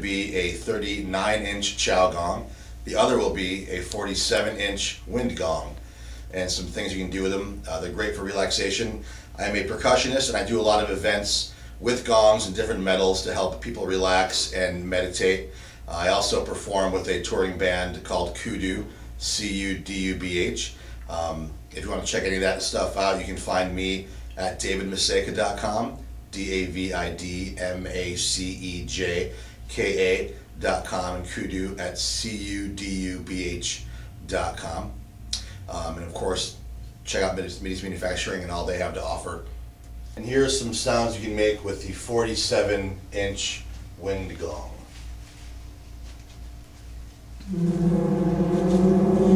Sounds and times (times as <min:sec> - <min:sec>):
Speech: 0:00.0 - 0:35.0, 0:35.7 - 0:39.5, 0:40.2 - 0:44.9.